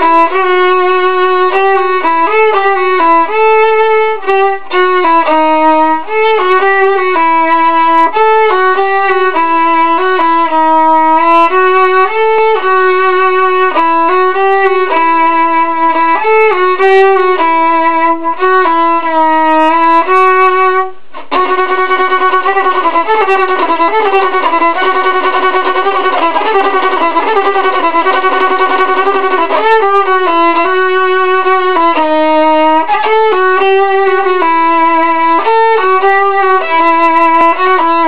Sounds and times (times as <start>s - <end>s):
Violin, fiddle: 0.0s - 38.0s.